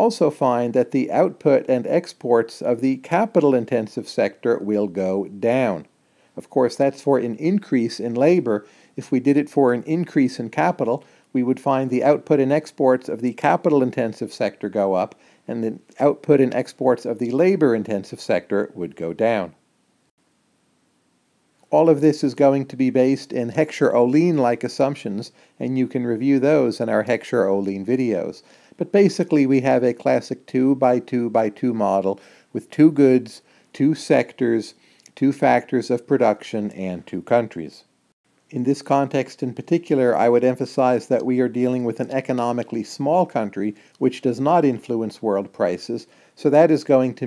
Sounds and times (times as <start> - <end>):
Speech: 0.0 - 19.6, 21.7 - 37.9, 38.5 - 47.2
Inside, small room: 0.0 - 47.2.